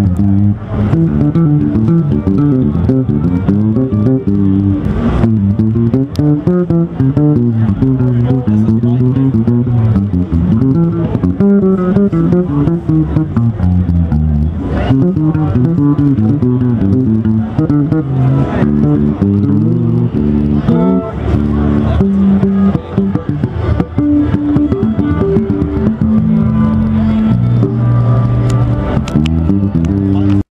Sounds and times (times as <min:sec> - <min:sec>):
Bass guitar: 0:00.0 - 0:30.5
Strum: 0:00.0 - 0:30.5
Speech: 0:07.4 - 0:10.8, 0:29.8 - 0:30.5.